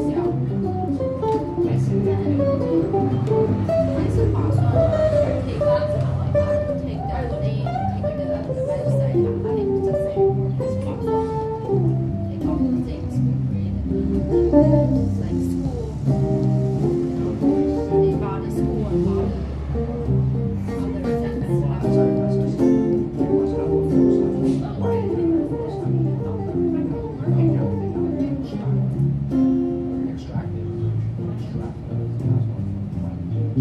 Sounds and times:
Speech: 0.0s - 33.6s.

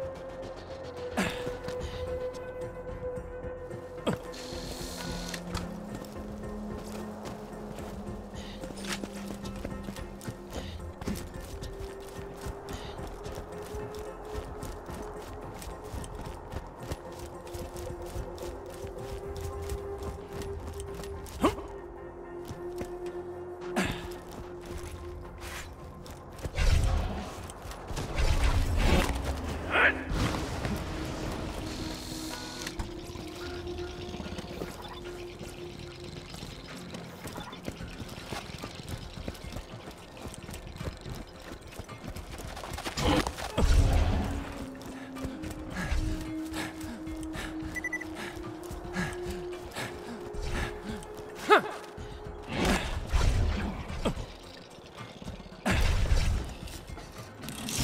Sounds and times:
Run: 0.0s - 3.1s, 3.8s - 26.5s, 30.2s - 53.1s
Music: 0.0s - 57.8s.

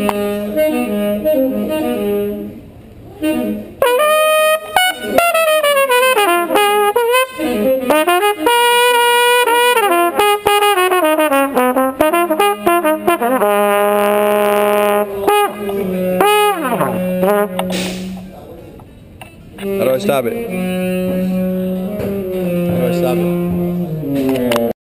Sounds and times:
Trumpet: 0.0s - 18.4s, 19.6s - 24.7s
Speech: 19.6s - 20.5s, 22.7s - 23.6s.

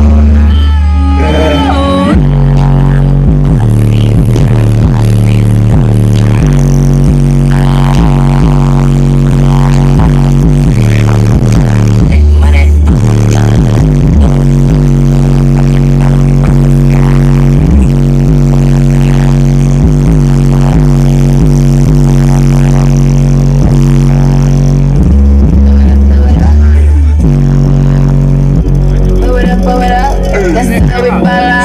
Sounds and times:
Music: 0.0s - 31.6s.

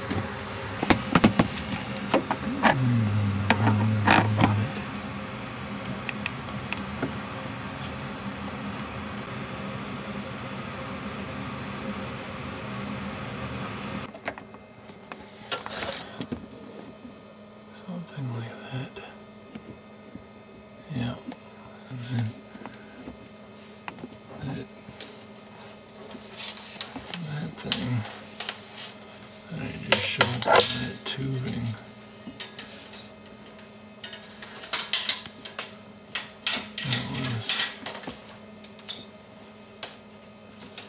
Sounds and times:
Microwave oven: 0.0s - 40.8s.

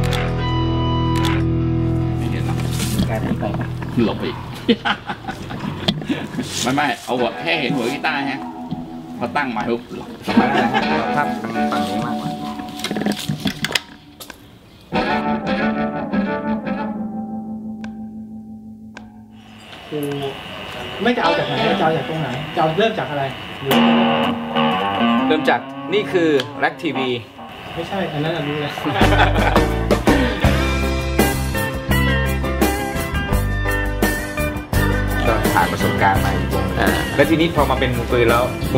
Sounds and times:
Guitar: 0.0s - 38.7s
Speech: 6.6s - 8.4s, 19.9s - 23.4s, 25.3s - 29.2s, 35.2s - 38.7s.

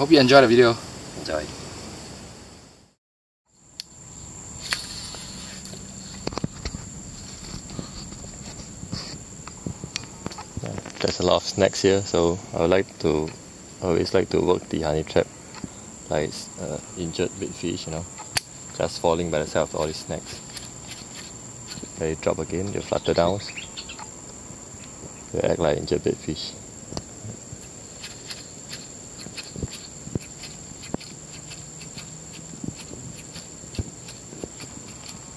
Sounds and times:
Speech: 0.0s - 1.6s, 10.6s - 15.3s, 16.1s - 18.1s, 18.8s - 20.4s, 22.0s - 23.6s, 25.3s - 26.6s
Outside, rural or natural: 0.0s - 35.3s
Bird vocalization, bird call, bird song: 22.7s - 24.1s.

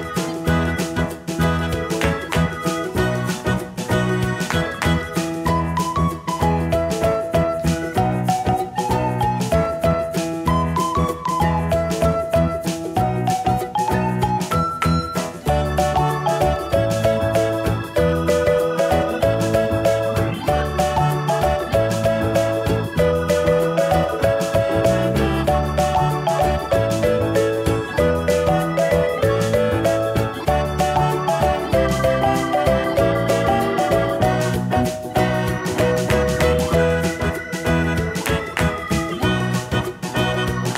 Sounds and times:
Music: 0.0s - 40.7s.

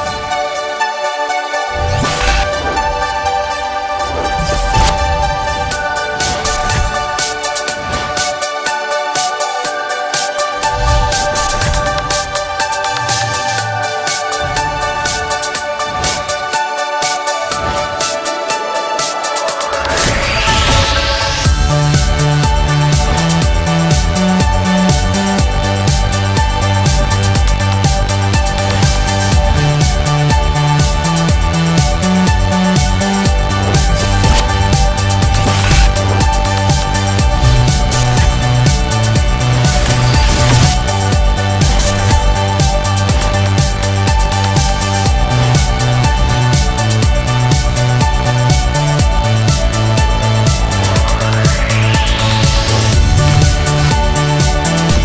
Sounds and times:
Music: 0.0s - 55.0s.

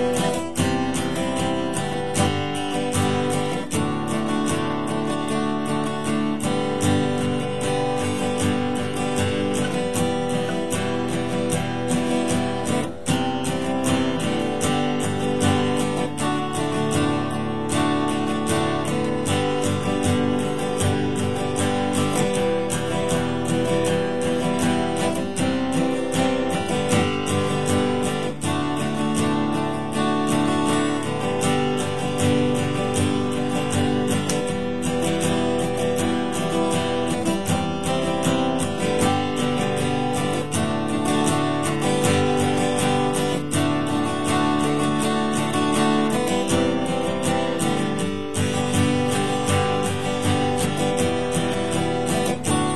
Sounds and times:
Music: 0.0s - 52.7s.

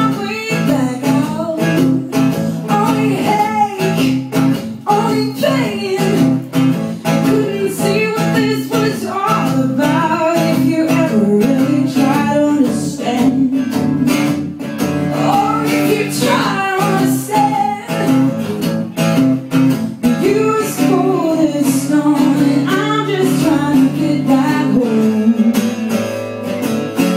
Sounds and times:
Blues: 0.0s - 27.1s.

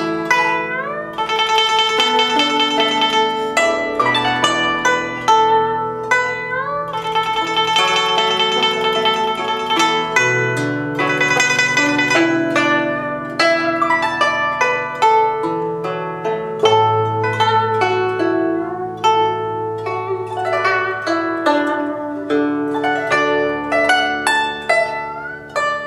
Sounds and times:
Zither: 0.0s - 25.8s.

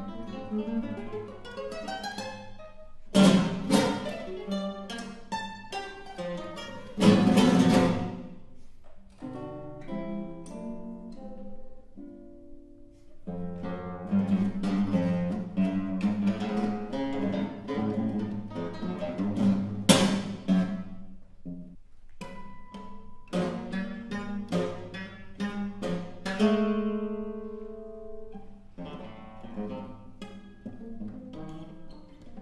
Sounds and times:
Guitar: 0.0s - 32.4s.

